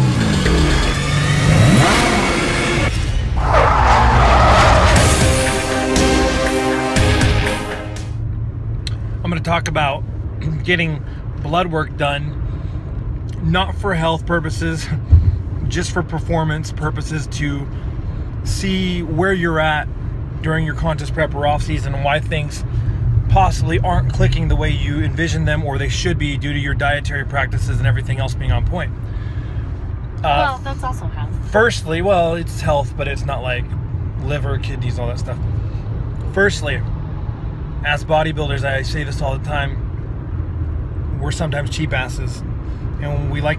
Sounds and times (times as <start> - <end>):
Car: 0.0 - 43.5
Speech: 30.2 - 35.4, 43.0 - 43.5.